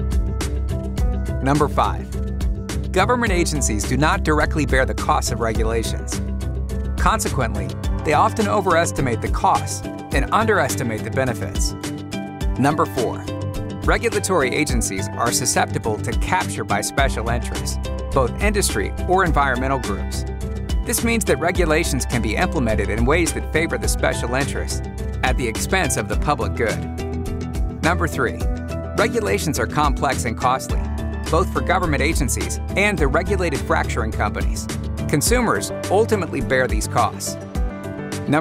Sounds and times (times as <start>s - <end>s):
Music: 0.0s - 38.4s
Speech: 1.4s - 2.1s, 2.9s - 6.2s, 7.0s - 11.7s, 12.6s - 13.3s, 13.9s - 20.2s, 20.9s - 26.8s, 27.8s - 28.4s, 29.0s - 37.4s.